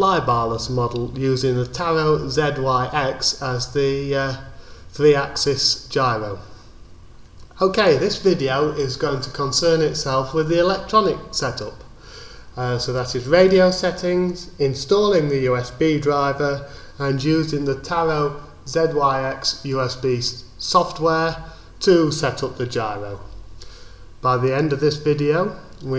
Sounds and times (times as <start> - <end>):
Speech: 0.0 - 6.5, 7.5 - 11.9, 12.6 - 23.3, 24.2 - 25.9.